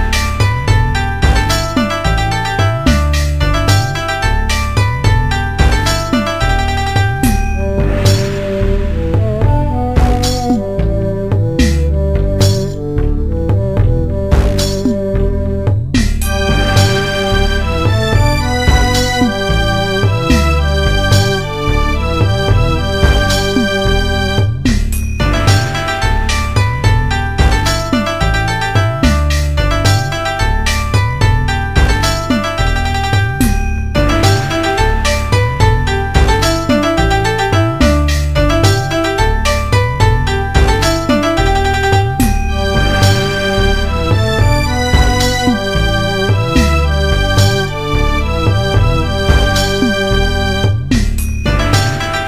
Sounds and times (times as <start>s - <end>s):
Happy music: 0.0s - 52.2s.